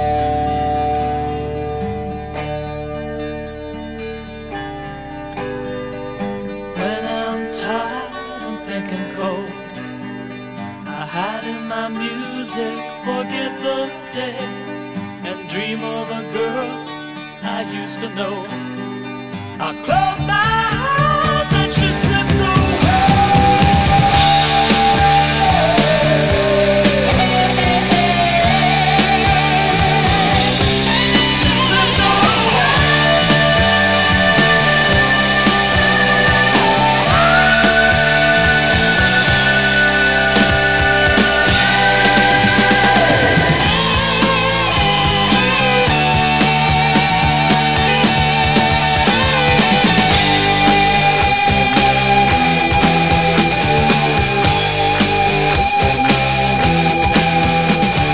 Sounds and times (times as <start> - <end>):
Grunge: 0.0 - 58.1.